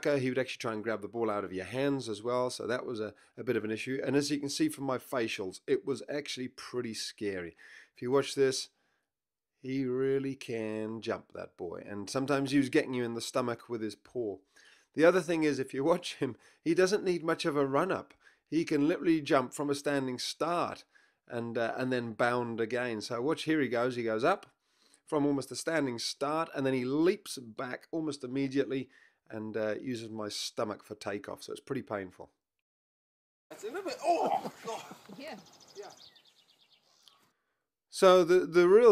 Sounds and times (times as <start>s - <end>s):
Speech: 0.0s - 8.7s, 9.7s - 14.4s, 15.0s - 24.4s, 25.1s - 32.3s, 33.6s - 35.9s, 38.0s - 38.9s.